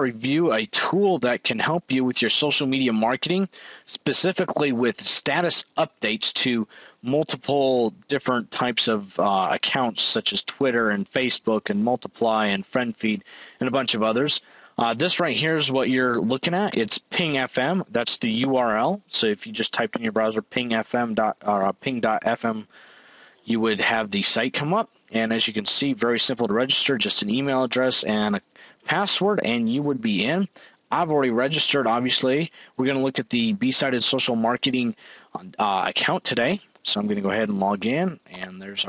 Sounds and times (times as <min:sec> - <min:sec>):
Speech: 0:00.0 - 0:22.7, 0:23.4 - 0:38.8.